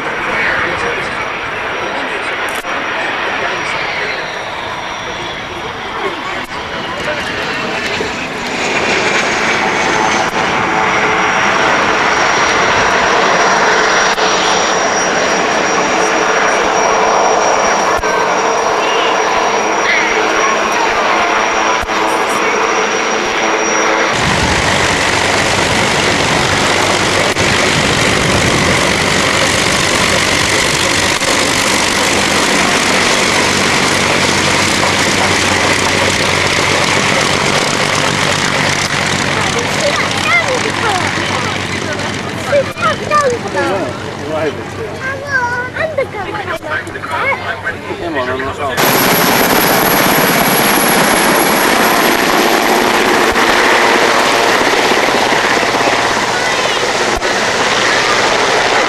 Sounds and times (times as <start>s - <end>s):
Speech: 0.0s - 9.1s, 15.1s - 23.6s, 35.1s - 48.8s, 55.4s - 58.8s
Aircraft engine: 0.0s - 58.8s
Fixed-wing aircraft, airplane: 0.0s - 58.8s.